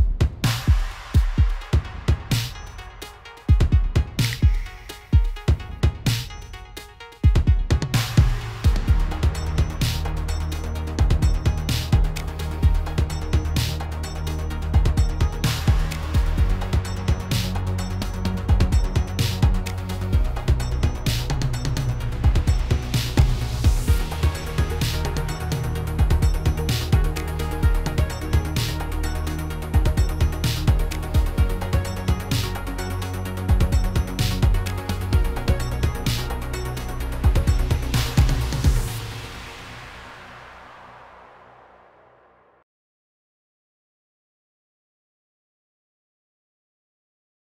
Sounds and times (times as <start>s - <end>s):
Music: 0.0s - 42.6s.